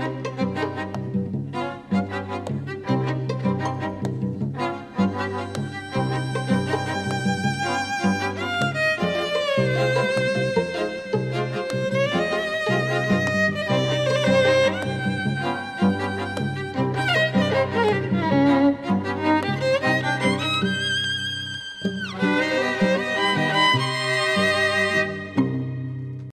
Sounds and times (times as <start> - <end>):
Music: 0.0 - 26.3.